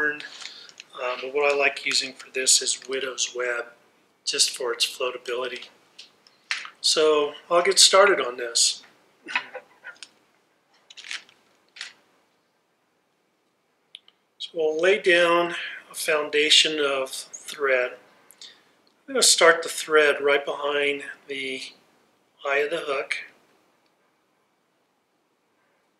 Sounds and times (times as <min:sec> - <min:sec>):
Speech: 0:00.0 - 0:05.8, 0:06.8 - 0:08.9, 0:14.4 - 0:18.1, 0:19.1 - 0:21.8, 0:22.4 - 0:23.4.